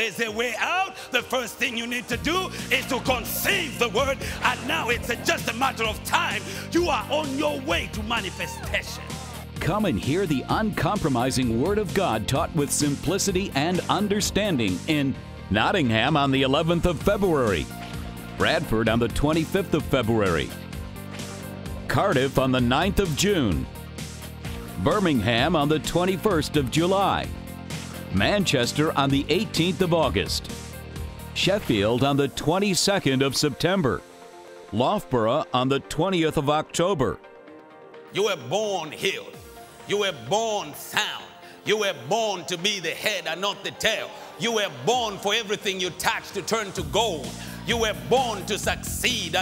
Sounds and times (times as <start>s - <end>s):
Speech: 0.0s - 17.7s, 18.4s - 20.6s, 21.9s - 23.7s, 24.8s - 27.3s, 28.1s - 30.5s, 31.4s - 34.0s, 34.8s - 37.2s, 38.2s - 39.3s, 39.9s - 49.4s
Music: 0.0s - 49.4s.